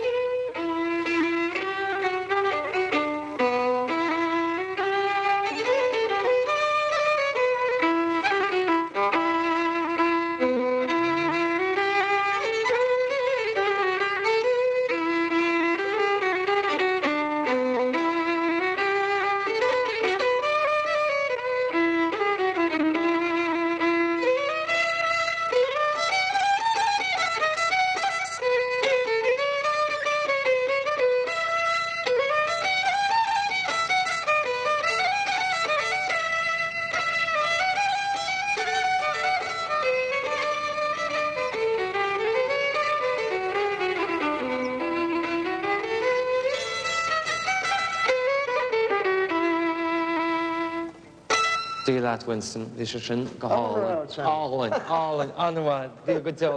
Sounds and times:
Violin, fiddle: 0:00.0 - 0:56.5.

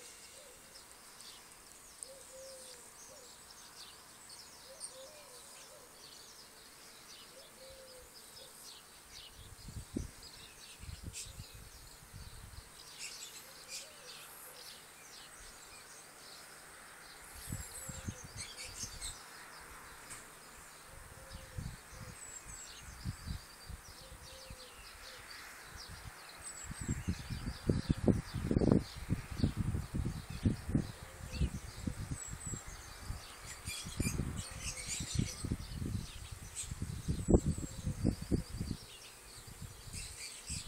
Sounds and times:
Chirp, tweet: 0:00.0 - 0:40.6.

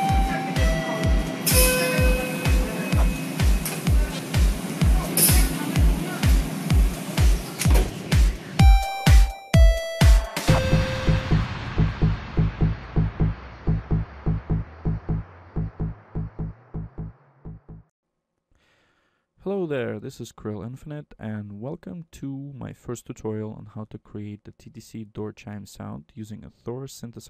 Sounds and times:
Speech: 0:03.9 - 0:06.4, 0:19.4 - 0:27.3.

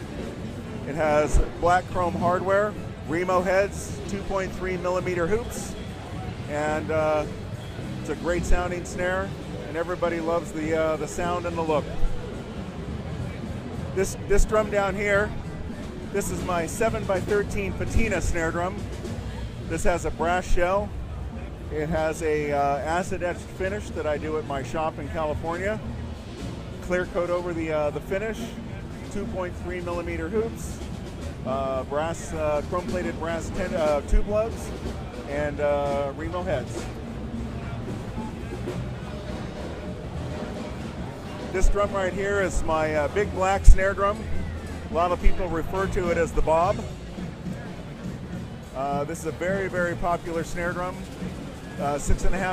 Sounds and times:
Speech: 0:00.8 - 0:07.4, 0:08.0 - 0:12.2, 0:13.2 - 0:15.4, 0:16.0 - 0:25.9, 0:26.8 - 0:39.8, 0:41.4 - 0:47.0, 0:48.7 - 0:52.5.

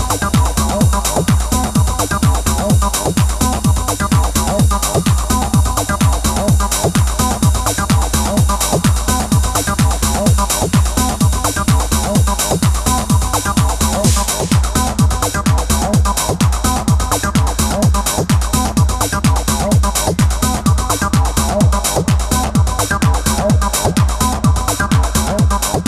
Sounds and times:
Techno: 0:00.0 - 0:25.8.

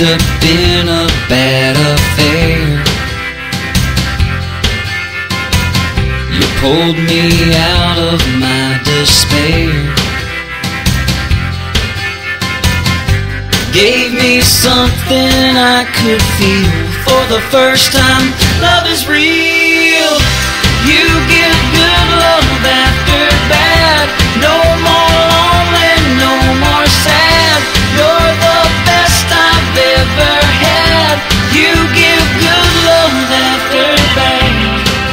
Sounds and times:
Country: 0:00.0 - 0:35.1.

